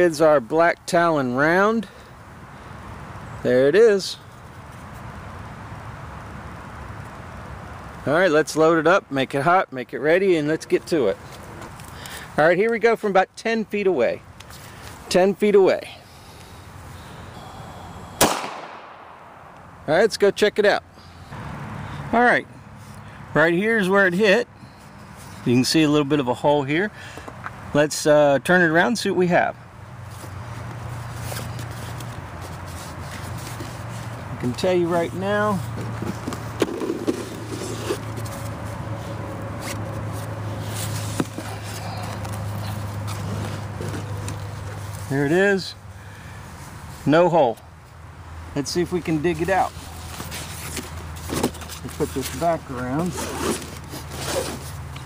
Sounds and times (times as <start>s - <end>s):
Speech: 0.0s - 1.9s, 3.4s - 4.2s, 8.0s - 11.2s, 12.4s - 14.2s, 15.1s - 16.0s, 19.9s - 20.9s, 22.1s - 22.5s, 23.4s - 24.5s, 25.5s - 26.9s, 27.8s - 29.6s, 34.4s - 35.6s, 45.1s - 45.8s, 47.0s - 47.6s, 48.6s - 49.8s, 51.9s - 53.3s
Outside, rural or natural: 0.0s - 55.0s.